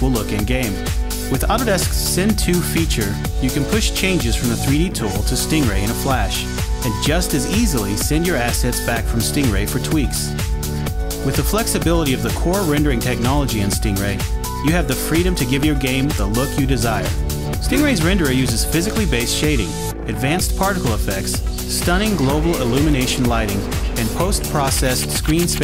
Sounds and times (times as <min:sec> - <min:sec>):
Speech: 0:00.0 - 0:10.4, 0:11.2 - 0:25.6
Music: 0:00.0 - 0:25.6.